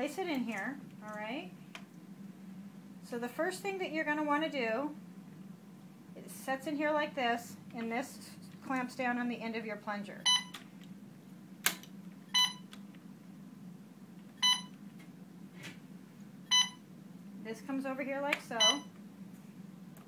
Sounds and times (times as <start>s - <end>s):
Speech: 0.0s - 1.6s, 3.1s - 5.0s, 6.2s - 10.2s, 17.4s - 18.9s
Beep, bleep: 10.2s - 10.5s, 12.4s - 12.6s, 14.4s - 14.7s, 16.5s - 16.8s, 18.6s - 18.9s.